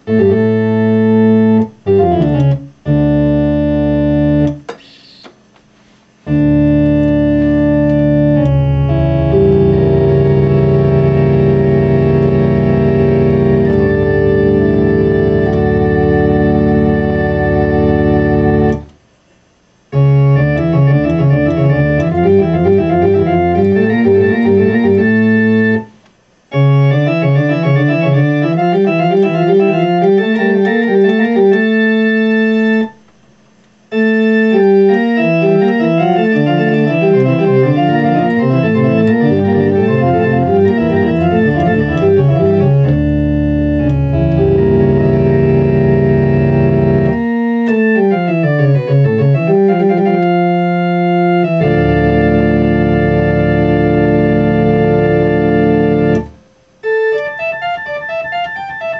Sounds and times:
Electric piano: 0:00.0 - 0:05.3, 0:06.2 - 0:19.0, 0:19.9 - 0:33.1, 0:33.9 - 0:58.9
Electronic organ: 0:00.0 - 0:58.9
Synthesizer: 0:19.9 - 0:33.1, 0:34.0 - 0:58.9.

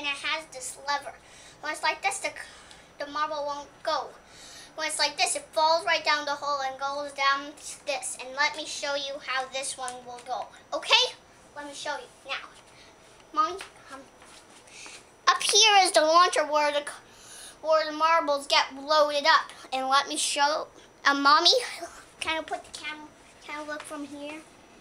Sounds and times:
Speech: 0:00.0 - 0:04.2, 0:04.8 - 0:12.6, 0:13.3 - 0:14.1, 0:15.3 - 0:17.0, 0:17.6 - 0:24.5.

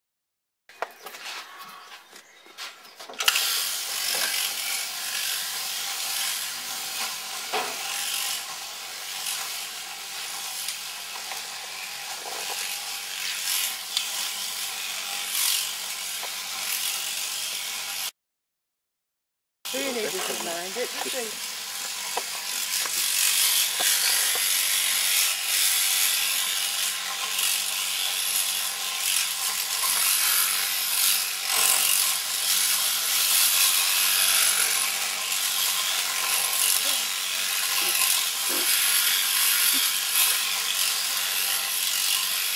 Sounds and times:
Speech: 0:19.7 - 0:21.4.

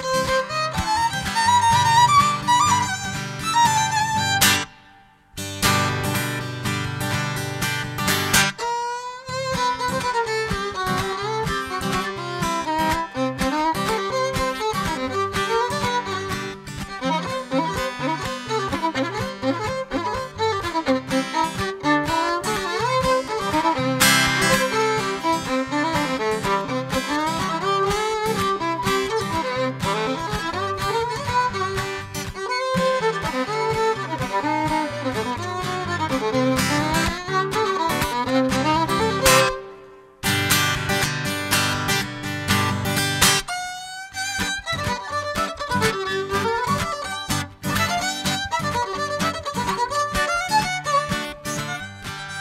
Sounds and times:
Violin, fiddle: 0:00.0 - 0:05.0, 0:05.6 - 0:52.4.

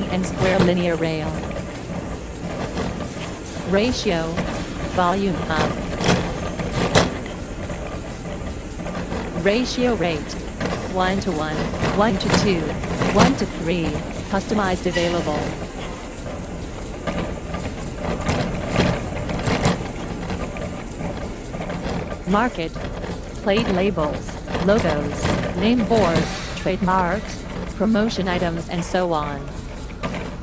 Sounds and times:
Speech: 0:00.0 - 0:01.5, 0:03.7 - 0:05.8, 0:09.4 - 0:15.6, 0:22.3 - 0:22.8, 0:23.4 - 0:29.6.

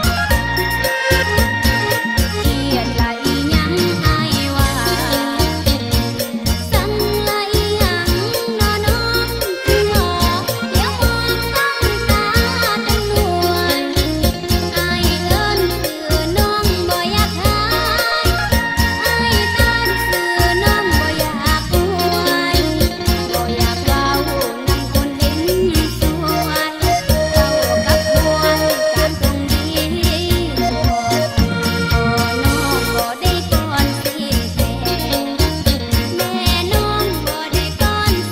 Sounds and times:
Dance music: 0:00.0 - 0:38.3.

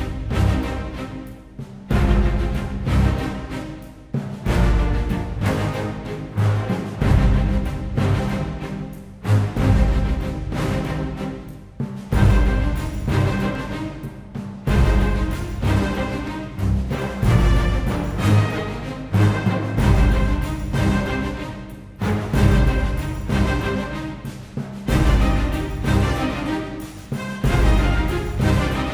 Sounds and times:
Music: 0:00.0 - 0:28.9.

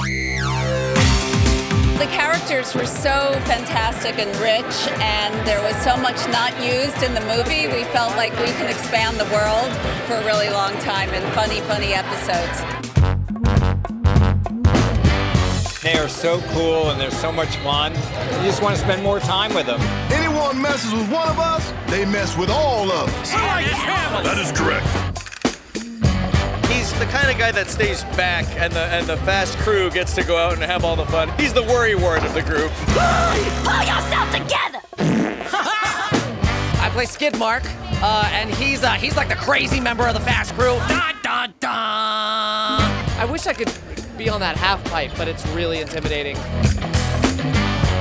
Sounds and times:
Music: 0:00.0 - 0:41.2, 0:42.5 - 0:48.0.

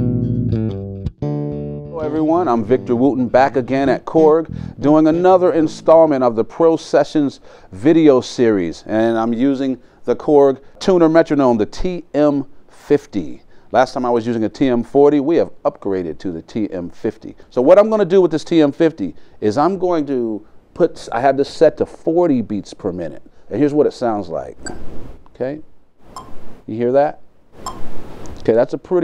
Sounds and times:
Speech: 0:02.0 - 0:24.6, 0:25.4 - 0:25.7, 0:26.7 - 0:27.2, 0:28.4 - 0:29.0.

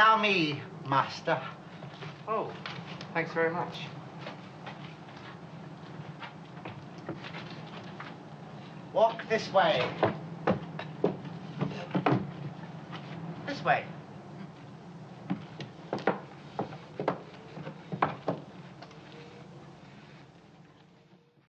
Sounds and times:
Speech: 0:09.0 - 0:10.0, 0:13.5 - 0:14.0.

